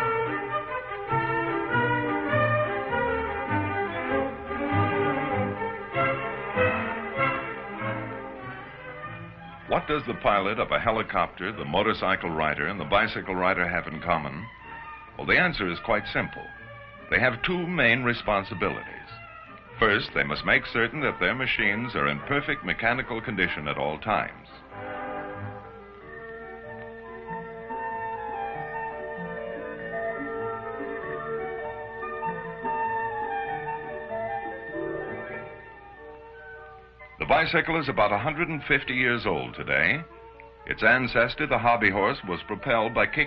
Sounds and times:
Music: 0.0 - 43.2
Speech: 9.7 - 14.5, 15.2 - 16.5, 17.1 - 19.2, 19.8 - 24.6, 37.2 - 40.1, 40.7 - 43.2.

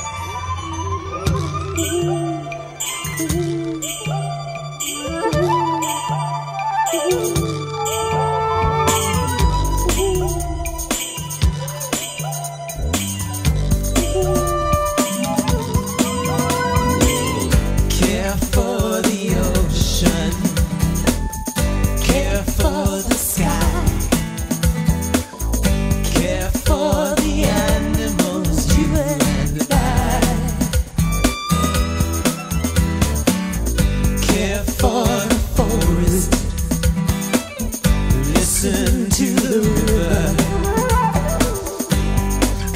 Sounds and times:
Music: 0.0 - 42.7.

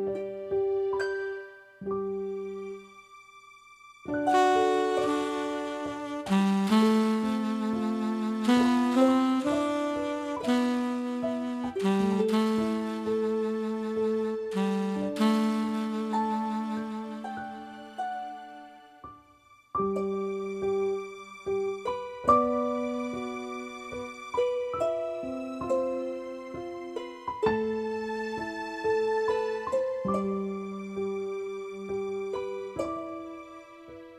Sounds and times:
Lullaby: 0.0 - 34.1.

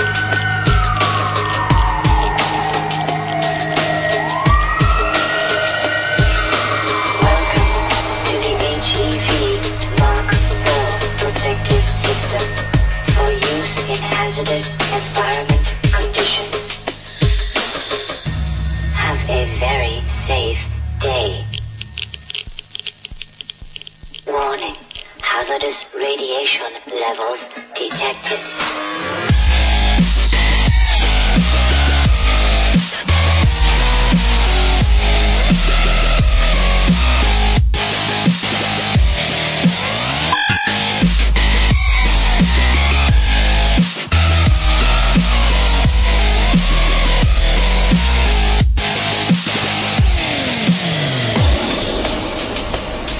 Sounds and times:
Dubstep: 0.0 - 18.3.

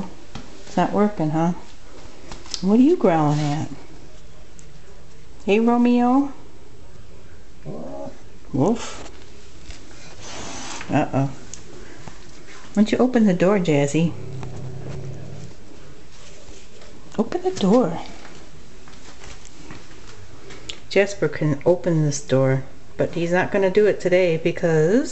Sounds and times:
Speech: 0.7 - 1.6, 2.6 - 3.8, 12.8 - 14.2, 17.2 - 18.2, 20.9 - 25.1.

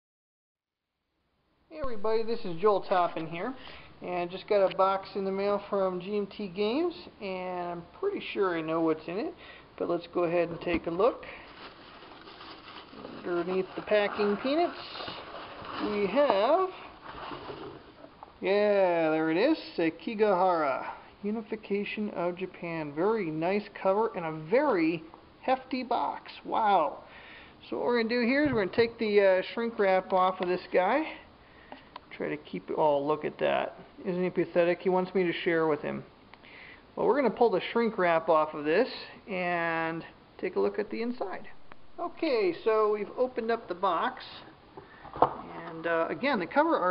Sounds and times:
Speech: 1.8 - 11.3, 13.1 - 15.2, 15.8 - 16.8, 18.4 - 27.0, 27.6 - 31.3, 32.1 - 36.1, 37.0 - 44.5, 45.4 - 46.9.

